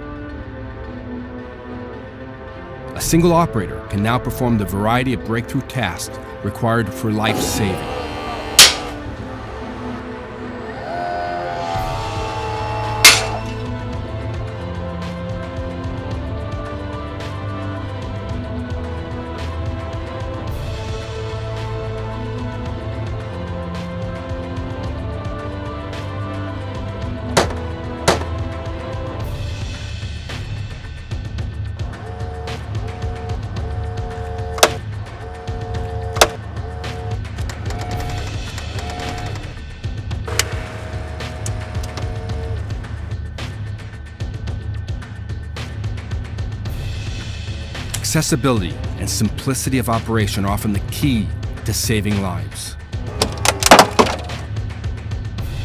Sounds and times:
Music: 0:00.0 - 0:55.6.

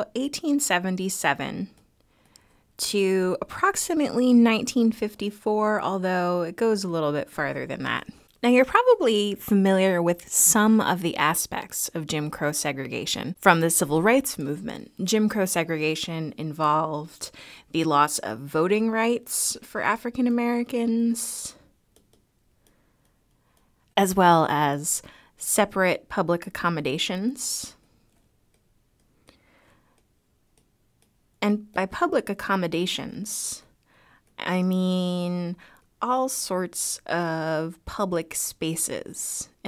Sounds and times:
Speech: 0:00.0 - 0:01.8, 0:02.8 - 0:21.7, 0:24.0 - 0:27.8, 0:31.4 - 0:33.7, 0:34.4 - 0:39.6.

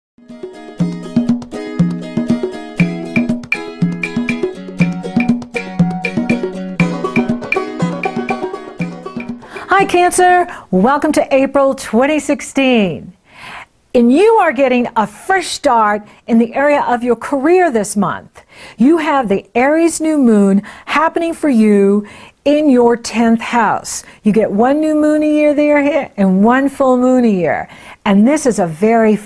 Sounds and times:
Wood block: 0:01.2 - 0:09.8
Speech: 0:09.6 - 0:13.2, 0:14.0 - 0:29.2.

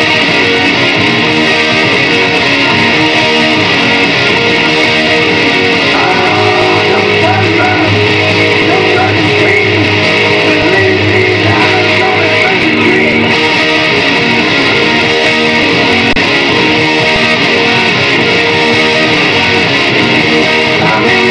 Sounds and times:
Acoustic guitar: 0:00.0 - 0:21.3
Electric guitar: 0:00.0 - 0:21.3.

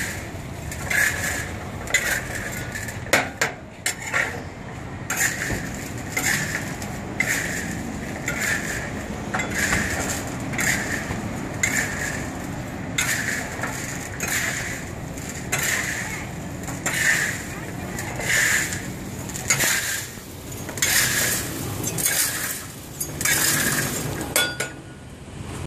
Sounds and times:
Speech: 0:15.5 - 0:20.0.

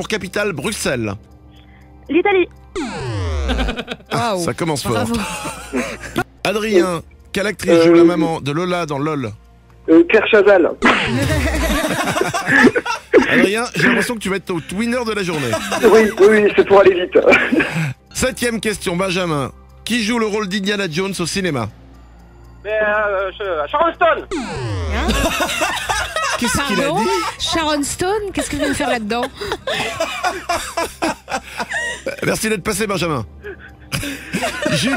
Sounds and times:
Speech: 0:00.0 - 0:01.2, 0:04.1 - 0:05.2, 0:06.5 - 0:09.4, 0:13.3 - 0:17.4, 0:18.2 - 0:21.7, 0:26.4 - 0:29.3, 0:32.1 - 0:33.3.

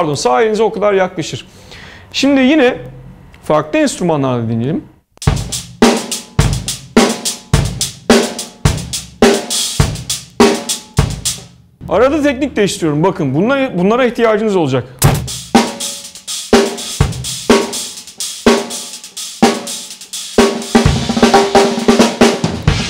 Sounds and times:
Bass drum: 0:05.2 - 0:11.5, 0:15.0 - 0:15.9, 0:20.4 - 0:22.9
Drum kit: 0:05.2 - 0:12.2, 0:15.0 - 0:22.9.

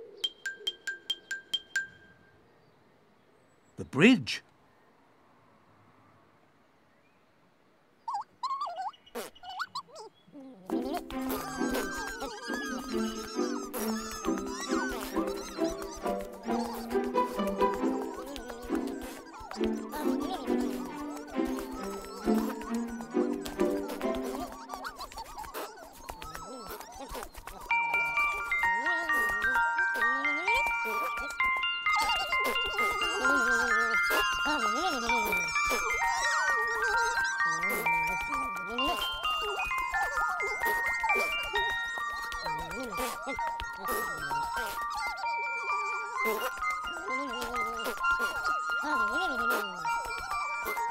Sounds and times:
Jingle, tinkle: 0:00.2 - 0:02.3, 0:27.5 - 0:50.9
Music: 0:10.7 - 0:24.8, 0:27.7 - 0:50.9.

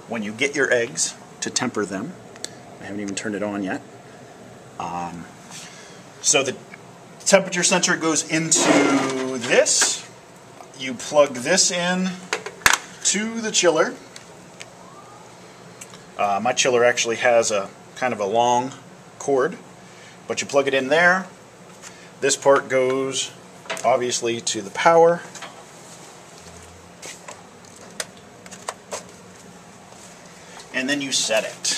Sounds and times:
Speech: 0:00.0 - 0:02.2, 0:02.8 - 0:03.9, 0:04.8 - 0:05.3, 0:06.2 - 0:12.3, 0:13.0 - 0:14.1, 0:16.2 - 0:19.7, 0:20.3 - 0:21.4, 0:22.2 - 0:25.4, 0:30.7 - 0:31.7.

